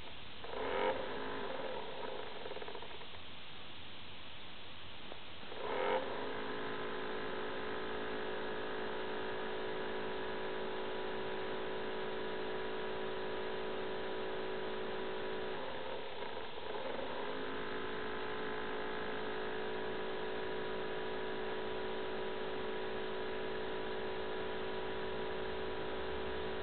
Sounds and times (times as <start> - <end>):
Vibration: 0.0 - 3.2, 5.4 - 26.6.